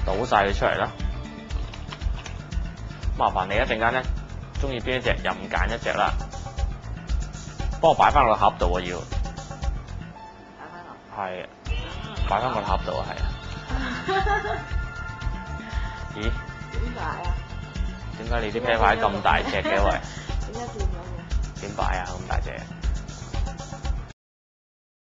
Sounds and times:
Music: 0.0 - 24.2.

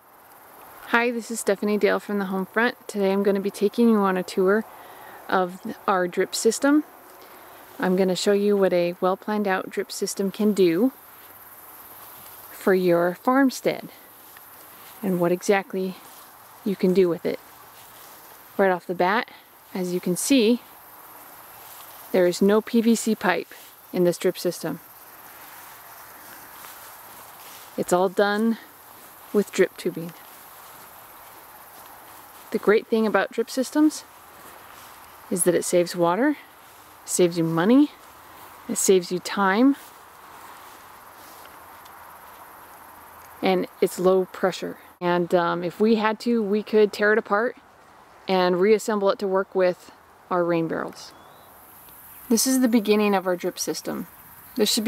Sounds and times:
Speech: 0.9 - 4.6, 5.3 - 6.9, 7.8 - 11.0, 12.6 - 14.0, 15.0 - 16.0, 16.7 - 17.4, 18.6 - 20.6, 22.2 - 24.8, 27.8 - 28.6, 29.3 - 30.2, 32.6 - 34.0, 35.3 - 36.4, 37.1 - 38.0, 38.7 - 39.8, 43.4 - 47.6, 48.3 - 51.1, 52.3 - 54.8.

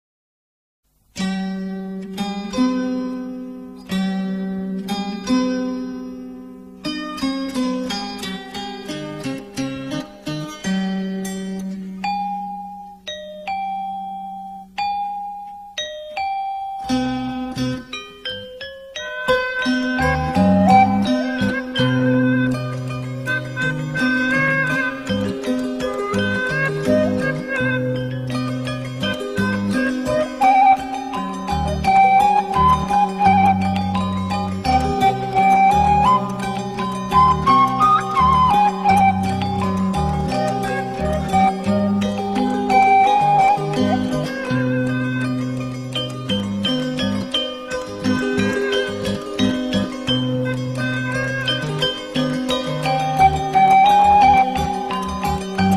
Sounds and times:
Music: 0.9 - 55.7
Ding-dong: 12.0 - 20.4.

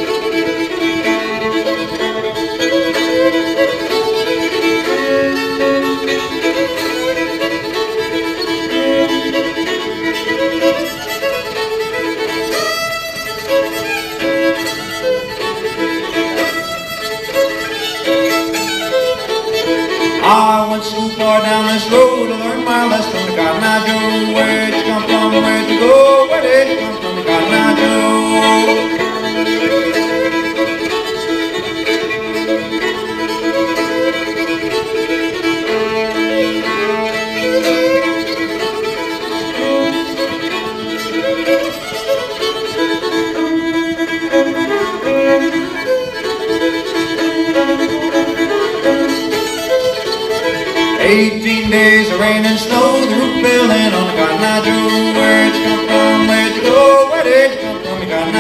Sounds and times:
Violin, fiddle: 0.0 - 58.4.

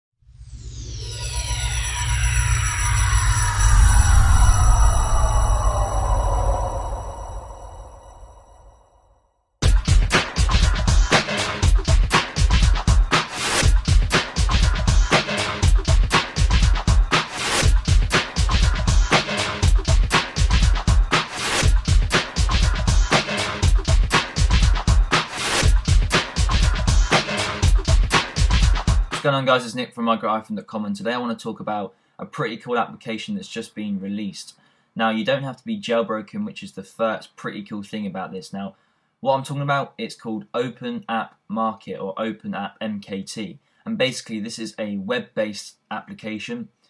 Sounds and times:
Music: 9.6 - 29.3.

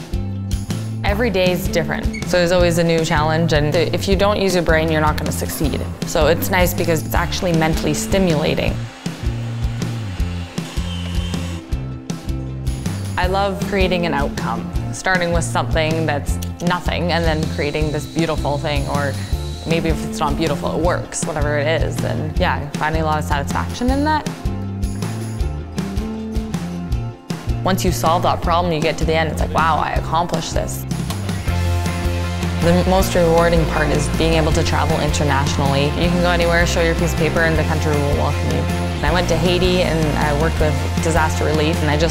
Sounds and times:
Music: 0.0 - 42.1
Speech: 1.0 - 8.8, 13.2 - 24.3, 27.7 - 30.8, 32.6 - 42.1.

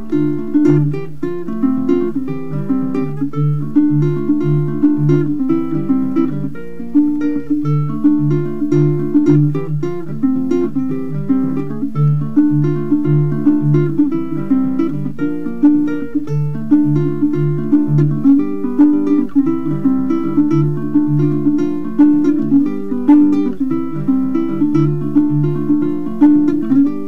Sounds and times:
Music: 0.0 - 27.0.

